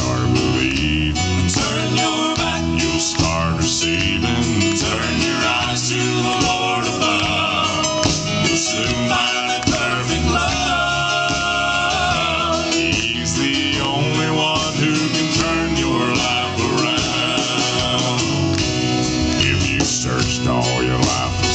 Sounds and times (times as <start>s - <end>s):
Singing: 0.0s - 18.7s
Music: 0.0s - 21.5s.